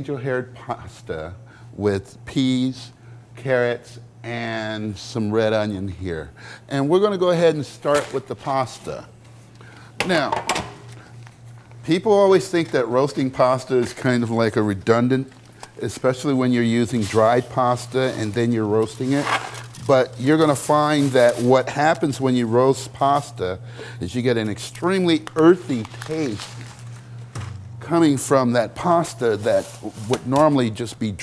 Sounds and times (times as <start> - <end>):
Speech: 0.0 - 9.1, 10.0 - 10.4, 11.8 - 26.5, 27.8 - 31.2.